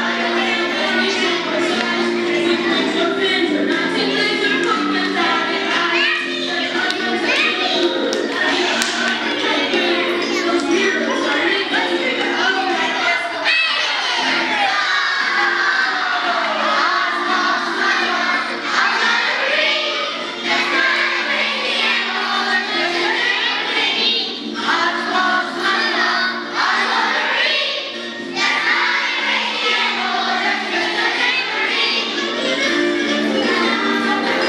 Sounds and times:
Female singing: 0:00.0 - 0:13.4
Music: 0:00.0 - 0:34.4
Speech: 0:05.9 - 0:14.8.

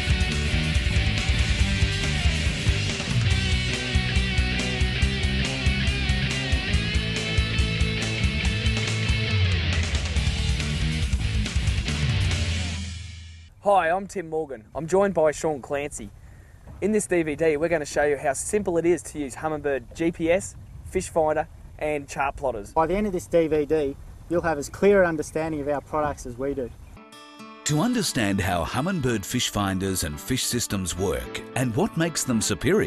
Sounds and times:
Speech: 0:13.6 - 0:16.1, 0:16.8 - 0:26.7, 0:27.7 - 0:32.8.

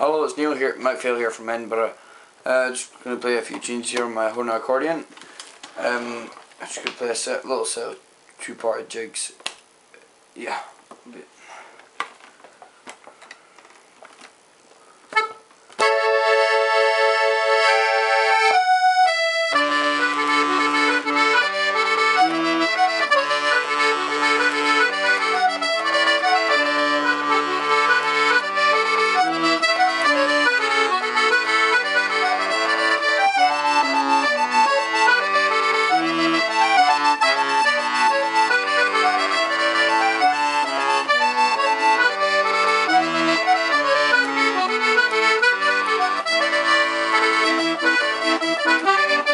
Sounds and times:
Speech: 0:00.0 - 0:05.1, 0:05.8 - 0:09.4, 0:10.4 - 0:11.3
Accordion: 0:00.0 - 0:06.9, 0:15.1 - 0:49.3
Inside, small room: 0:00.0 - 0:49.3.

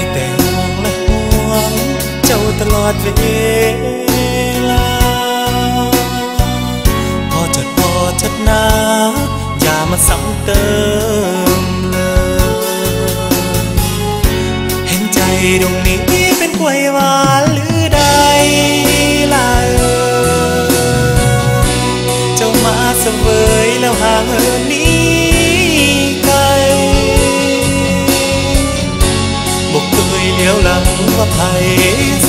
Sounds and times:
Music: 0:00.0 - 0:32.2.

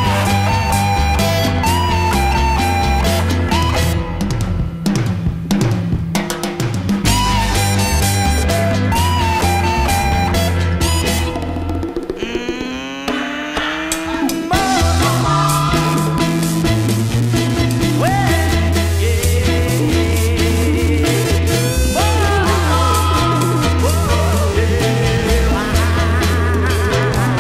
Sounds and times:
Music: 0:00.0 - 0:27.4.

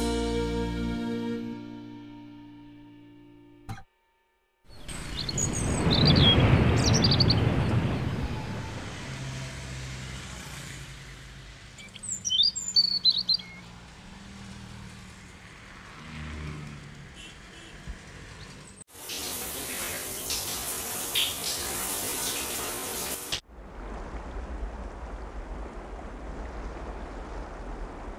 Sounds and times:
Chirp, tweet: 0:04.7 - 0:07.5, 0:11.8 - 0:13.6.

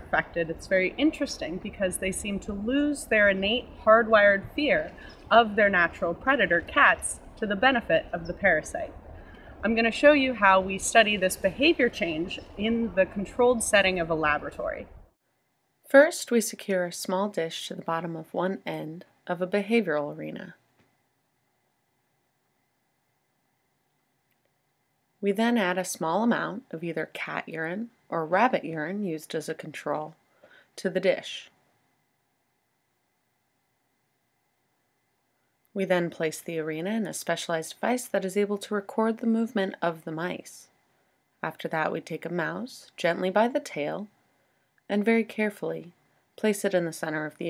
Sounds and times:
Speech: 0:00.0 - 0:09.0, 0:09.6 - 0:14.9, 0:15.9 - 0:20.6, 0:25.2 - 0:30.2, 0:30.8 - 0:31.5, 0:35.8 - 0:40.7, 0:41.4 - 0:44.1, 0:44.9 - 0:47.5.

